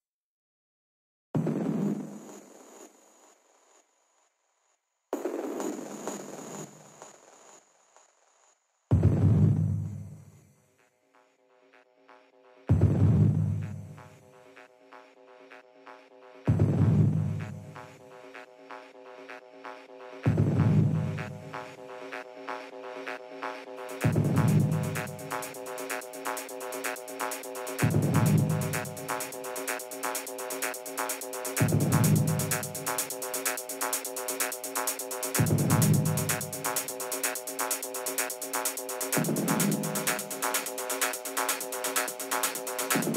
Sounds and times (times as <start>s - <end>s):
Electronic music: 11.2s - 43.1s.